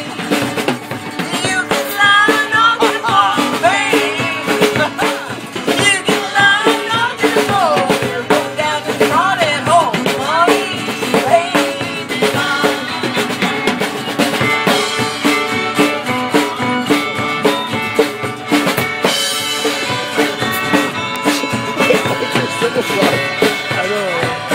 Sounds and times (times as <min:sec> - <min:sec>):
Drum: 0:00.0 - 0:24.5
Drum kit: 0:00.0 - 0:24.5.